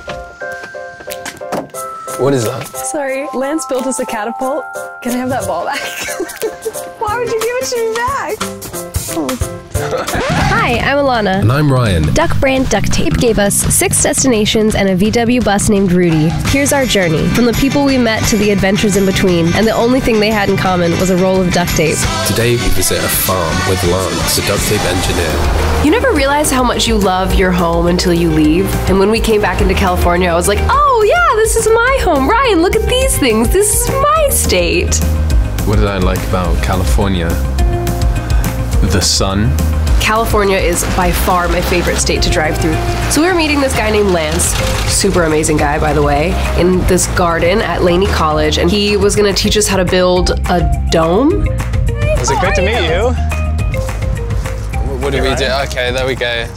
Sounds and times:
Music: 0.0s - 56.5s
Speech: 35.7s - 37.4s.

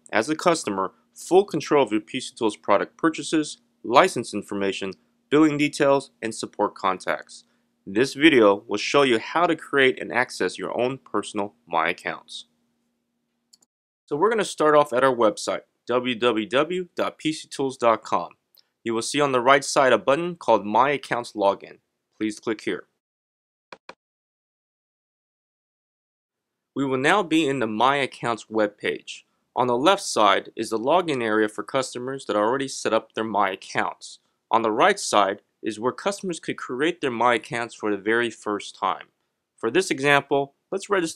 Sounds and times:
Speech: 0.0s - 12.5s, 14.1s - 23.0s, 26.8s - 41.1s.

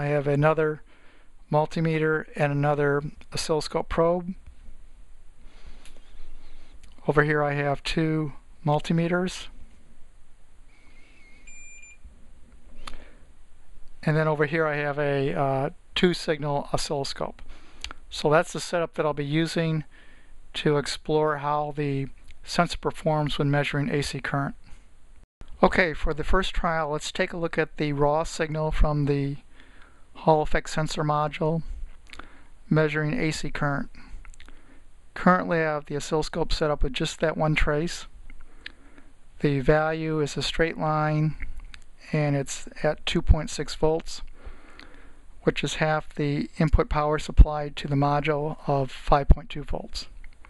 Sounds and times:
Speech: 0.0s - 0.8s, 1.5s - 4.4s, 7.0s - 9.5s, 14.0s - 17.4s, 18.1s - 19.9s, 20.6s - 24.6s, 25.6s - 29.5s, 30.2s - 31.7s, 32.7s - 34.1s, 35.2s - 38.1s, 39.4s - 44.3s, 45.4s - 50.2s
Beep, bleep: 11.3s - 12.0s.

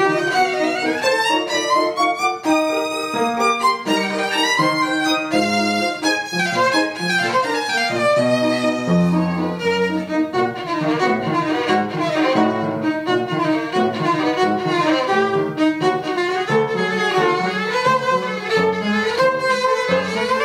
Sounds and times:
Violin, fiddle: 0.0s - 20.4s.

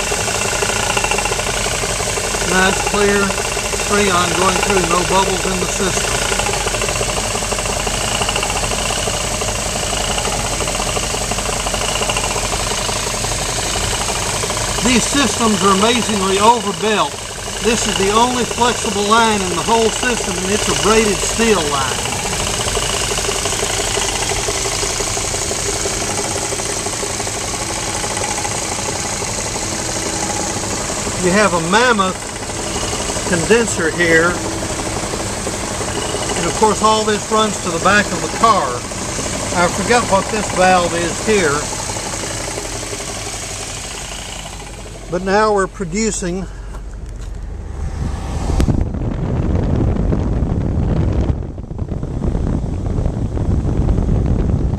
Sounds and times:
Vehicle: 0.0s - 54.7s
Speech: 2.4s - 6.1s, 14.8s - 22.1s, 31.2s - 32.2s, 33.3s - 34.4s, 36.4s - 38.9s, 39.5s - 41.7s, 45.1s - 46.5s.

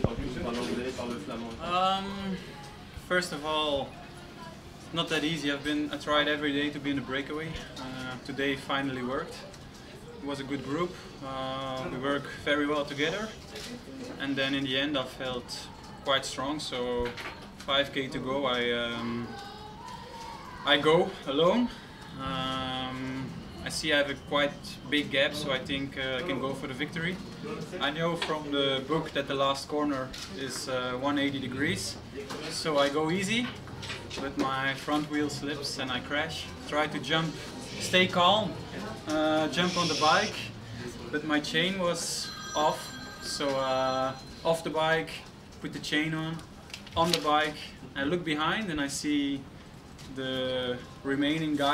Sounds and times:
Speech: 10.2s - 46.4s.

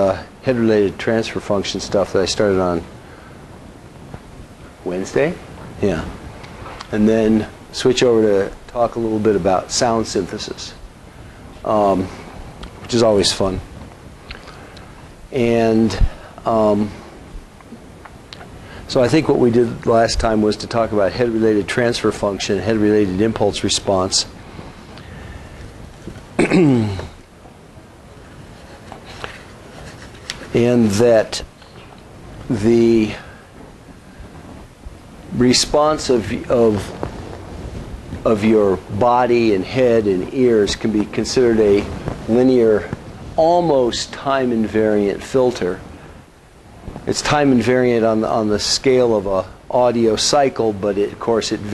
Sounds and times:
Speech: 0.0s - 2.9s, 4.8s - 6.2s, 6.9s - 10.8s, 11.6s - 12.2s, 12.9s - 13.7s, 15.3s - 17.0s, 18.9s - 24.4s, 30.5s - 31.5s, 32.5s - 33.3s, 35.3s - 37.0s, 38.2s - 45.9s, 47.1s - 51.7s.

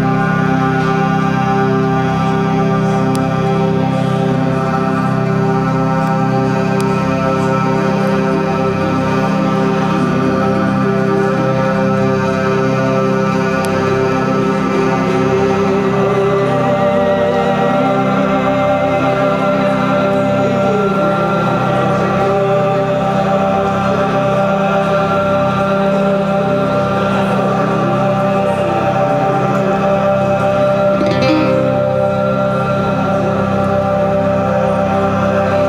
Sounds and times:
Music: 0.0s - 35.6s.

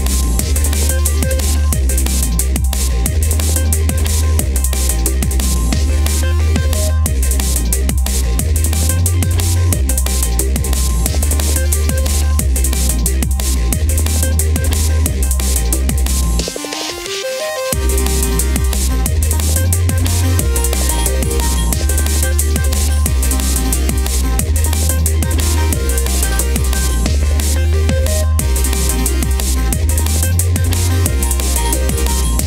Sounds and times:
Dubstep: 0.0s - 32.4s.

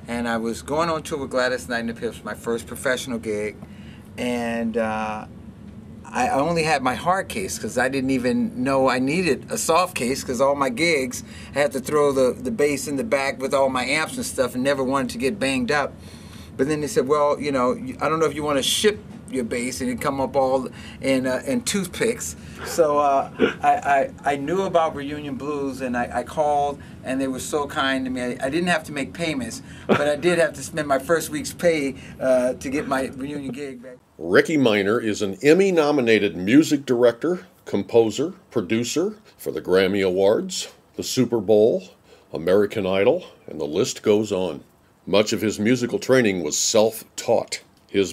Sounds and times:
Speech: 0.0s - 3.6s, 4.2s - 5.3s, 6.1s - 16.0s, 16.6s - 48.1s.

